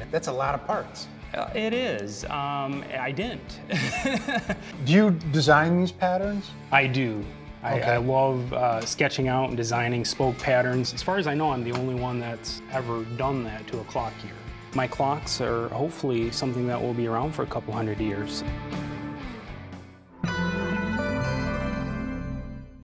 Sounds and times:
Music: 0.0s - 22.8s
Speech: 4.9s - 18.4s.

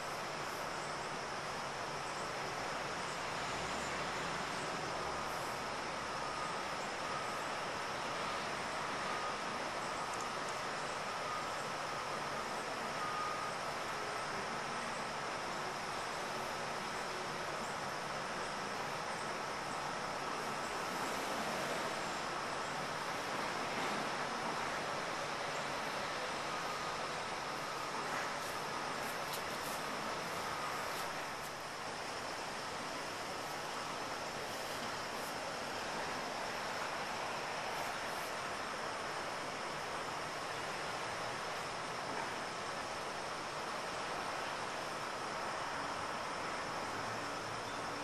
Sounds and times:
White noise: 0.0s - 48.0s.

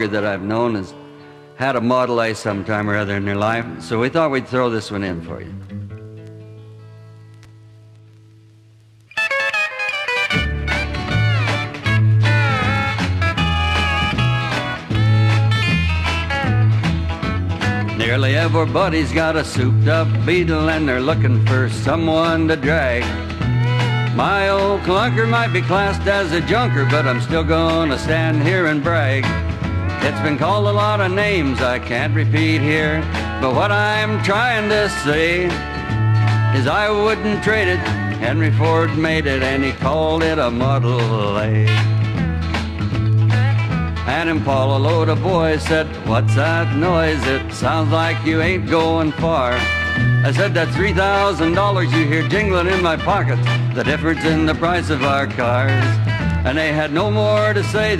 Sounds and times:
Music: 0.0s - 57.9s.

